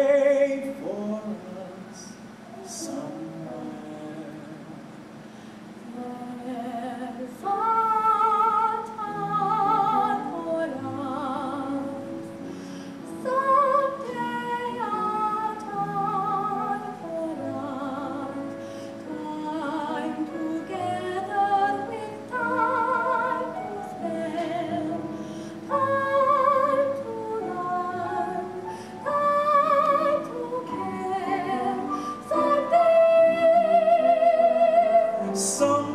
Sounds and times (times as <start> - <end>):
Music: 0.0 - 35.9.